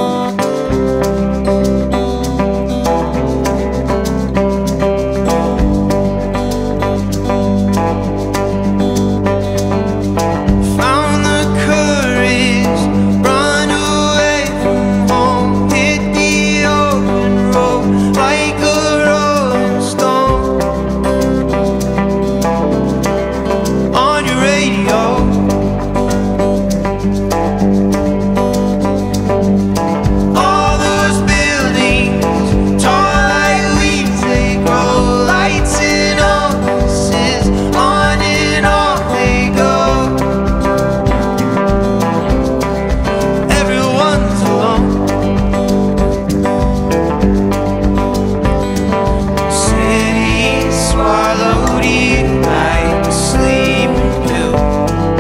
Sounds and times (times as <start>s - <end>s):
Country: 0.0s - 55.2s.